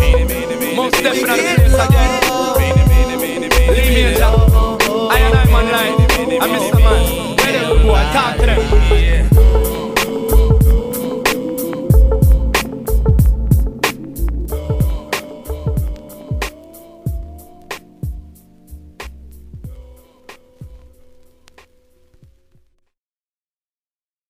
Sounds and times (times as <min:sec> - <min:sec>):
Music: 0:00.0 - 0:23.0.